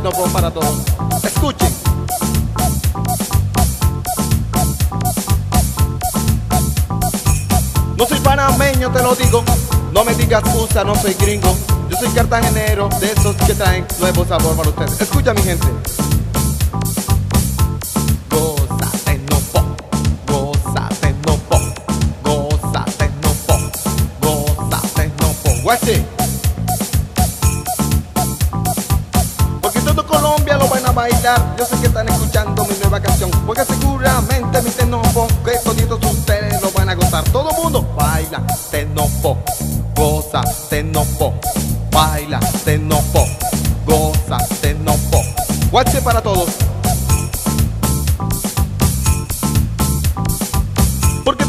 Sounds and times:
Techno: 0.0 - 51.4.

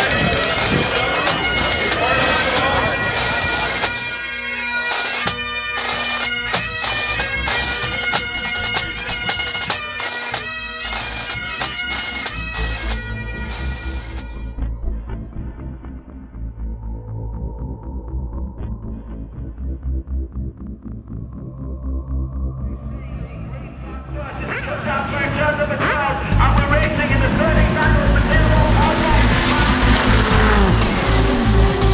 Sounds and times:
Music: 0.0 - 31.9.

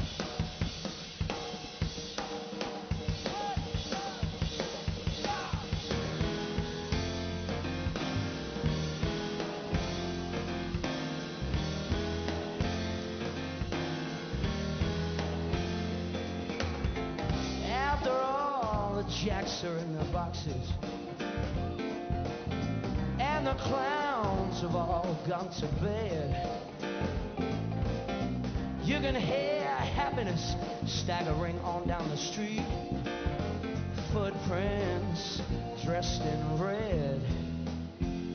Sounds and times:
Music: 0.0 - 38.3.

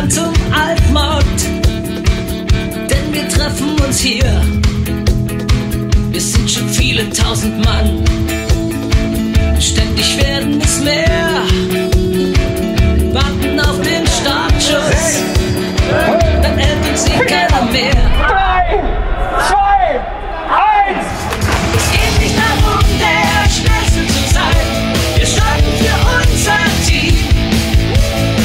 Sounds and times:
Music: 0.0 - 19.1, 21.0 - 28.4.

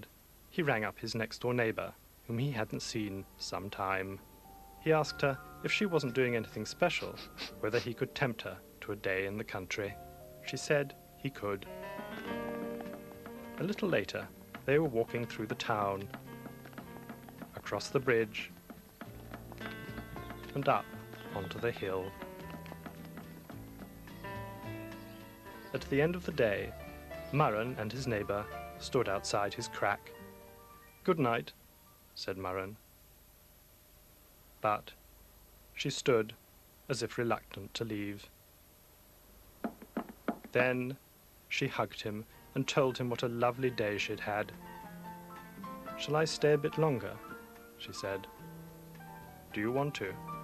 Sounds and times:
Speech: 0.0 - 4.2, 4.8 - 11.7, 13.6 - 16.1, 17.6 - 18.5, 20.4 - 22.2, 25.8 - 30.1, 31.0 - 31.6, 32.2 - 32.8, 34.6 - 35.0, 35.8 - 38.3, 40.6 - 44.6, 46.0 - 48.3, 49.5 - 50.2
Music: 2.3 - 32.1, 41.8 - 50.4.

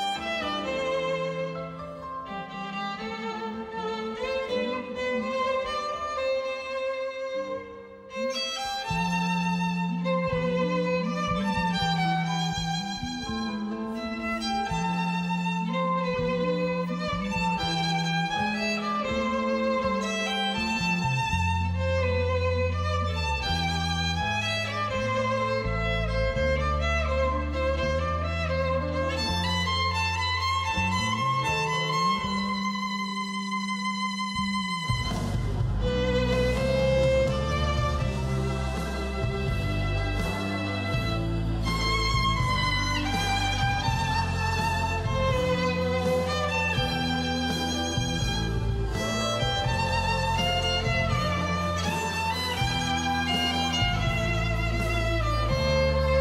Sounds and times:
Violin, fiddle: 0.0 - 56.2.

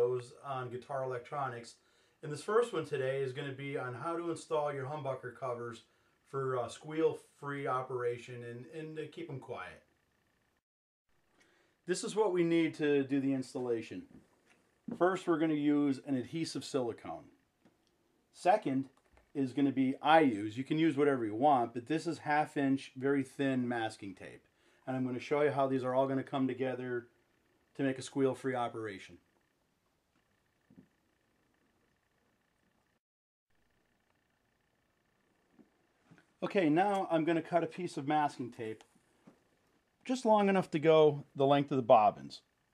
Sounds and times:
Speech: 0.0 - 9.9, 11.9 - 14.1, 14.9 - 17.3, 18.4 - 27.1, 27.8 - 29.2, 36.4 - 38.8, 40.1 - 42.5.

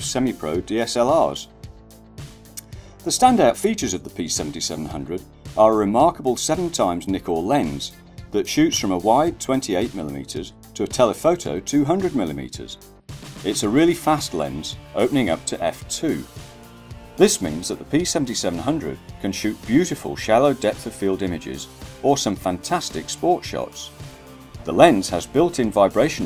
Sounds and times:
Speech: 0.0 - 1.5, 3.0 - 12.8, 13.4 - 16.3, 17.2 - 24.0, 24.6 - 26.2
Music: 0.0 - 26.2.

